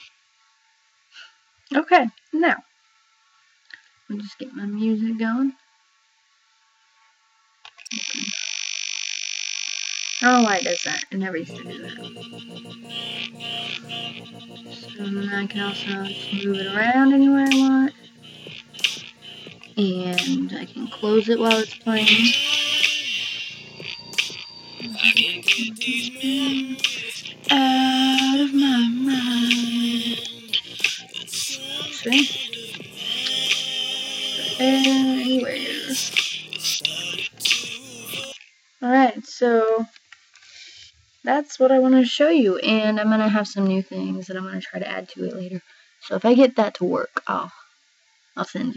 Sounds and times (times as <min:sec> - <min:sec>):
Inside, small room: 0:00.0 - 0:09.0, 0:09.6 - 0:48.7
Music: 0:11.3 - 0:38.4.